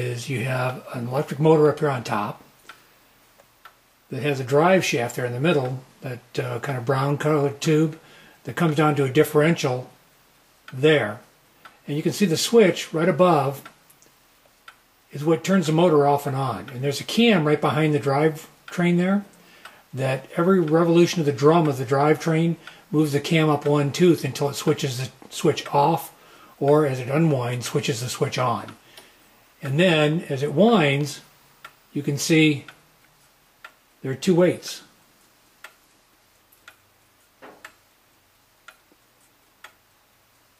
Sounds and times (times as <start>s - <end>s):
Speech: 0.0s - 2.4s, 4.1s - 10.0s, 10.7s - 13.7s, 15.1s - 19.3s, 19.9s - 28.8s, 29.6s - 31.3s, 31.9s - 32.8s, 34.0s - 34.9s.